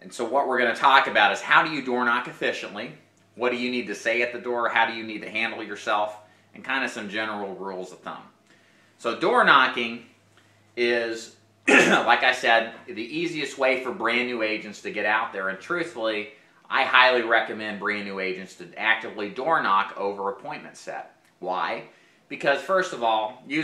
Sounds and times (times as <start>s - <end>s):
Speech: 0.0s - 8.4s, 9.0s - 10.1s, 10.8s - 23.6s.